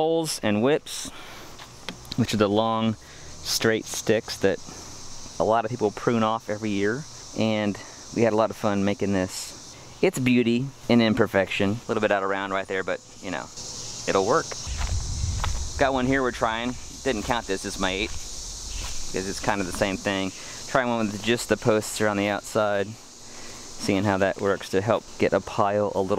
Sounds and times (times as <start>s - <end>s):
Speech: 0.0s - 1.1s, 2.2s - 4.6s, 5.4s - 14.5s, 15.8s - 18.1s, 19.1s - 23.0s, 23.8s - 26.1s
Outside, rural or natural: 0.0s - 26.1s.